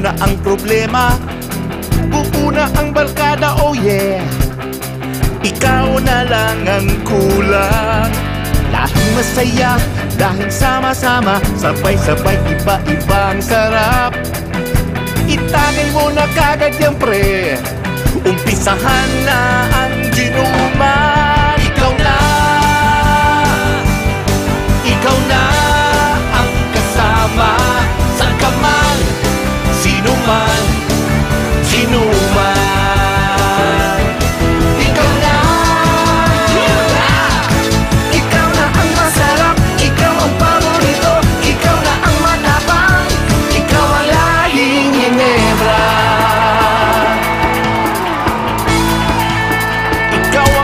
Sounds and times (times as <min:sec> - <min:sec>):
Music: 0:00.0 - 0:50.6.